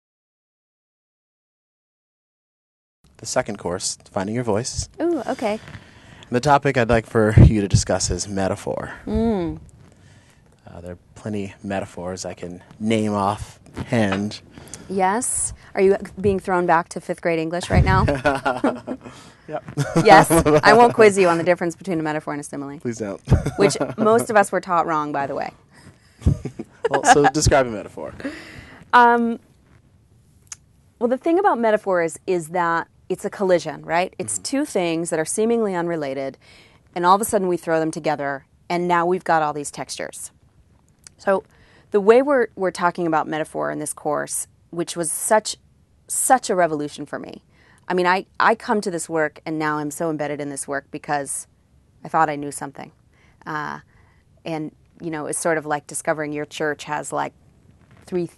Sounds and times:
Female speech, woman speaking: 5.0s - 5.6s, 9.1s - 9.6s, 14.9s - 18.3s, 20.0s - 22.8s, 23.6s - 25.5s, 26.9s - 27.6s, 28.9s - 29.4s, 31.0s - 36.4s, 37.0s - 40.3s, 41.1s - 41.4s, 42.0s - 51.4s, 52.1s - 52.9s, 53.5s - 53.8s, 54.5s - 57.3s, 58.1s - 58.3s.

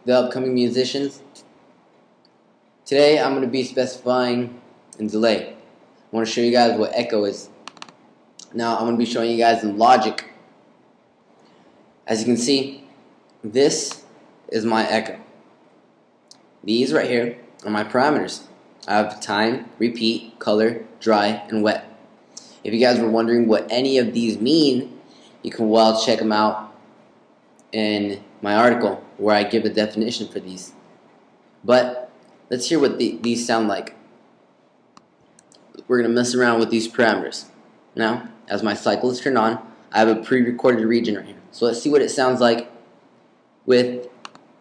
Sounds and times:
Speech: 0.0s - 1.5s, 2.9s - 7.6s, 8.4s - 10.4s, 12.1s - 15.3s, 16.6s - 22.0s, 22.6s - 26.8s, 27.7s - 30.8s, 31.6s - 34.0s, 35.8s - 42.8s, 43.7s - 44.2s.

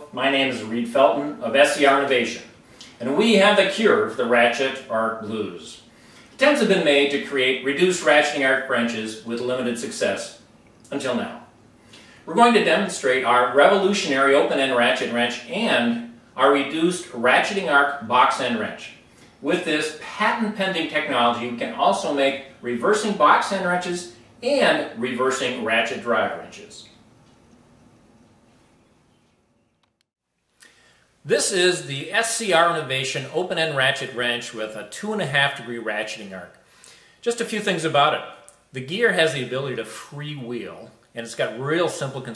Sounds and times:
Speech: 0.0s - 11.5s, 12.3s - 27.0s, 31.3s - 36.6s, 37.2s - 42.3s.

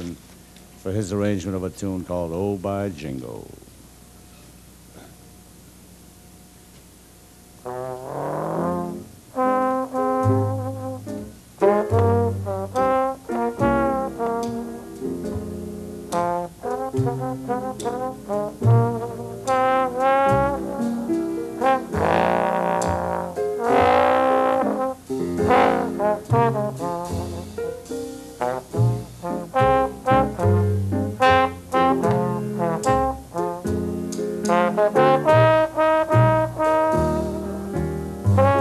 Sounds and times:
Jazz: 0.0s - 38.6s.

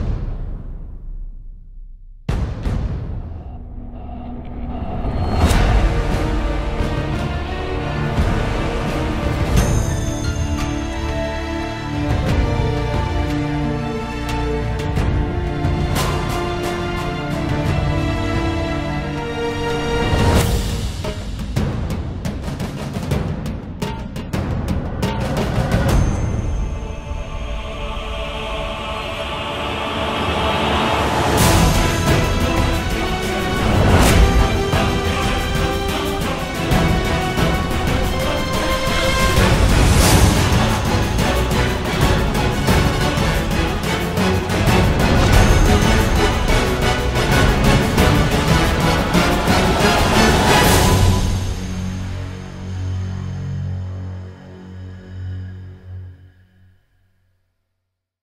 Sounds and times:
Music: 0.0s - 58.2s.

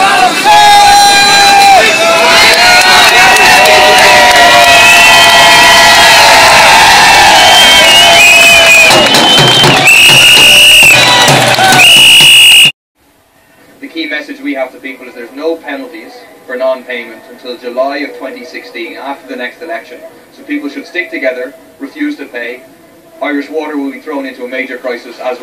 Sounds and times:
Outside, urban or manmade: 0.0s - 25.4s.

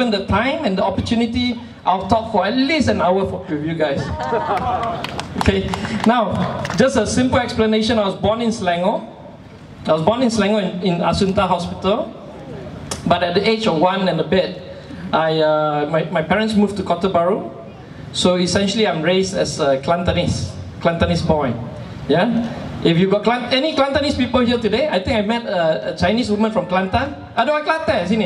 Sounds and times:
Male speech, man speaking: 0.0s - 4.2s, 5.4s - 9.1s, 9.9s - 12.1s, 13.0s - 17.6s, 18.2s - 28.2s
Narration, monologue: 0.0s - 28.2s.

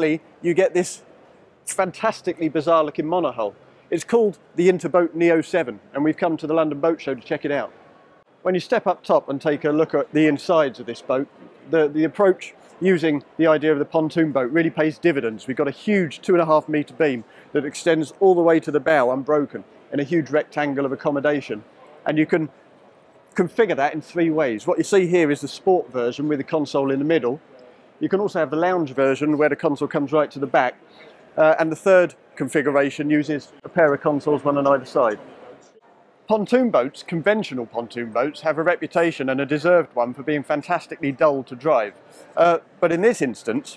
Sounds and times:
Speech: 0.0s - 1.0s, 1.7s - 7.7s, 8.4s - 22.5s, 23.4s - 27.4s, 28.0s - 30.8s, 31.4s - 35.7s, 36.3s - 43.7s.

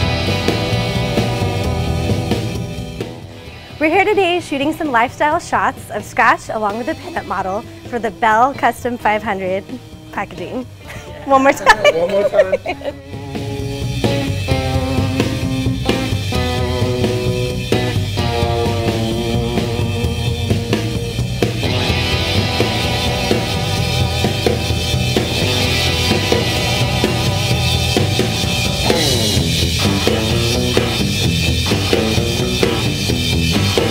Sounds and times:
Music: 0.0s - 33.9s.

